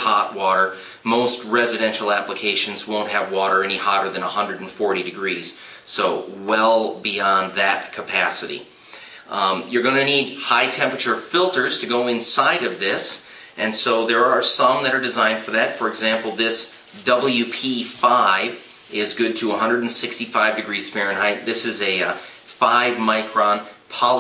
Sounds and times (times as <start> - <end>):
Speech: 0.0 - 8.7, 9.3 - 24.2.